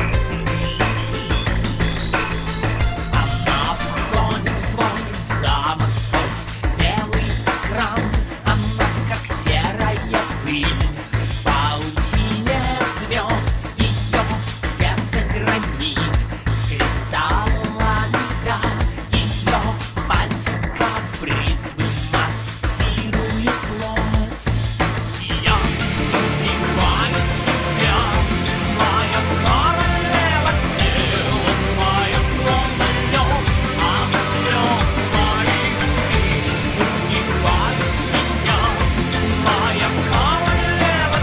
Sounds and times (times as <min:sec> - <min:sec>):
Music: 0:00.0 - 0:41.2.